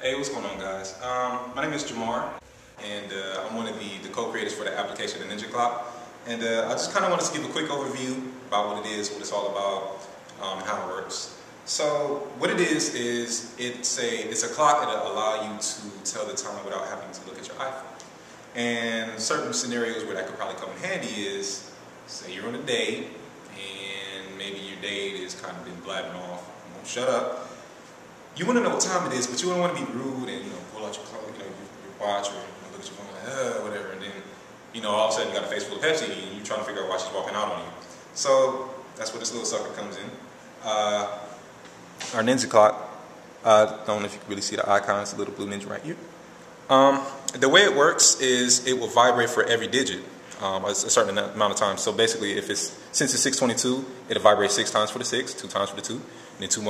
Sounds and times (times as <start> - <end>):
Speech: 0.0 - 18.0, 18.6 - 27.6, 28.4 - 41.4, 42.0 - 56.7.